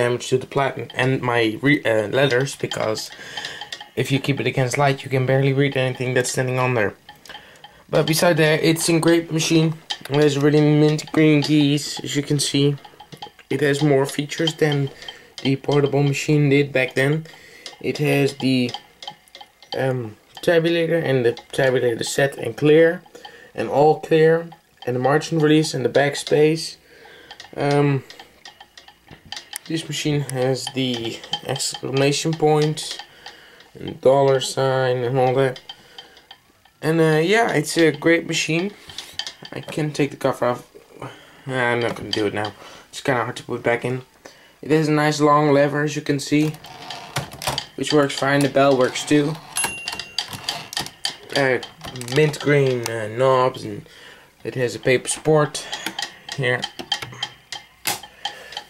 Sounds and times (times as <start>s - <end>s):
Speech: 0.0s - 3.2s, 4.0s - 7.0s, 7.9s - 12.8s, 13.5s - 18.8s, 19.8s - 26.8s, 27.6s - 28.0s, 29.7s - 33.0s, 33.8s - 35.6s, 36.8s - 38.8s, 39.6s - 40.7s, 41.5s - 46.6s, 47.8s - 49.4s, 51.3s - 55.8s, 56.4s - 56.7s.